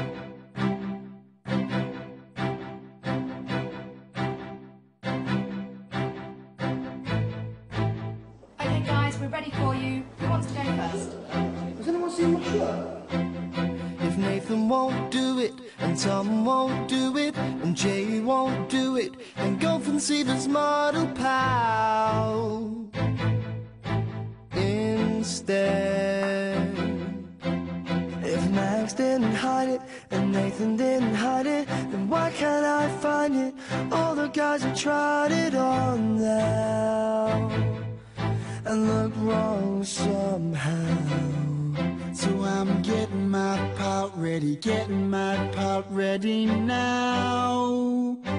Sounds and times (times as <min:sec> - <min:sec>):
Music: 0:00.0 - 0:48.3
Speech: 0:08.6 - 0:13.1.